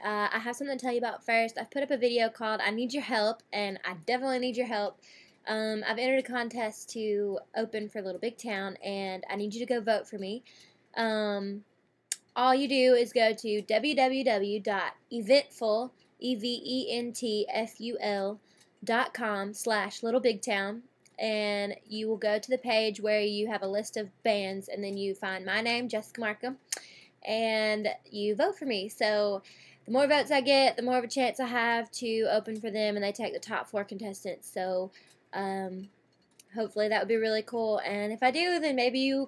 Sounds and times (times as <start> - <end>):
Speech: 0.0 - 10.4, 11.0 - 11.6, 12.2 - 35.9, 36.5 - 39.2.